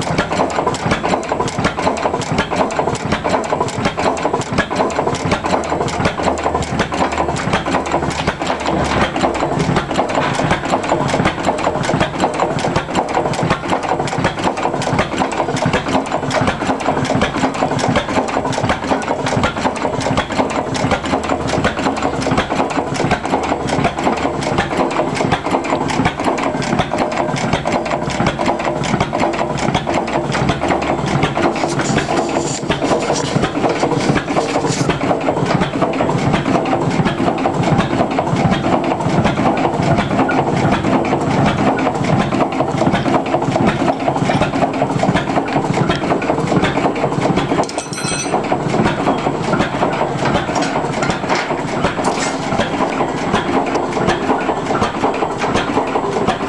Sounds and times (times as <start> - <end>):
Engine: 0.0 - 56.4.